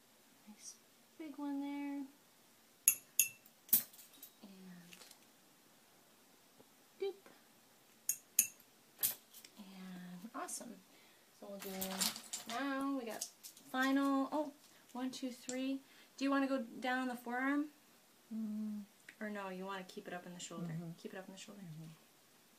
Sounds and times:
Speech: 0:09.6 - 0:10.8, 0:11.4 - 0:17.8, 0:18.4 - 0:22.0.

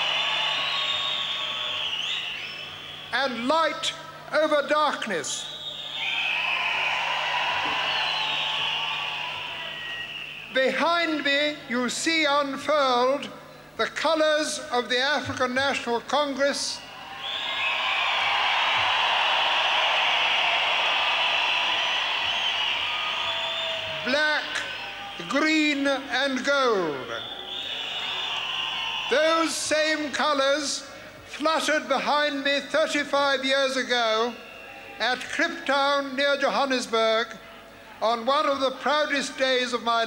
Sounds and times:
Narration, monologue: 0:03.1 - 0:05.6, 0:10.5 - 0:16.9, 0:24.0 - 0:27.2, 0:29.1 - 0:34.4, 0:35.0 - 0:40.0
Male speech, man speaking: 0:03.2 - 0:05.5, 0:10.6 - 0:16.8, 0:24.0 - 0:24.6, 0:25.2 - 0:27.2, 0:29.1 - 0:34.4, 0:35.0 - 0:37.4, 0:38.0 - 0:40.0.

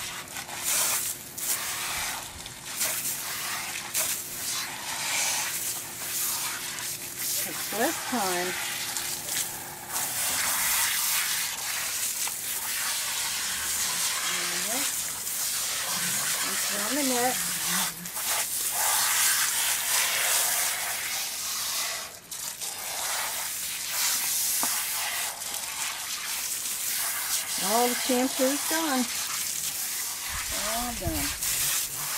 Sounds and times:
Gush: 0:00.0 - 0:32.1
Speech: 0:07.4 - 0:08.6, 0:14.3 - 0:14.9, 0:16.4 - 0:17.9, 0:27.6 - 0:29.1, 0:30.5 - 0:31.4.

